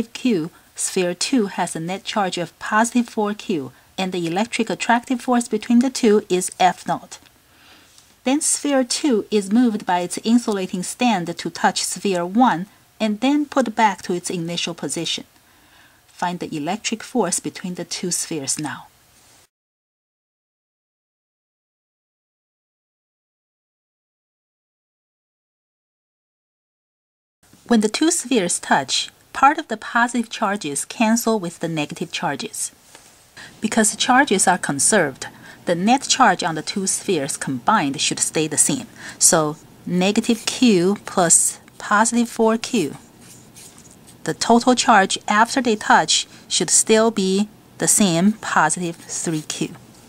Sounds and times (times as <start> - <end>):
Speech: 0.0 - 7.2, 8.2 - 15.3, 16.1 - 18.9, 27.7 - 32.8, 33.4 - 43.0, 44.2 - 49.8.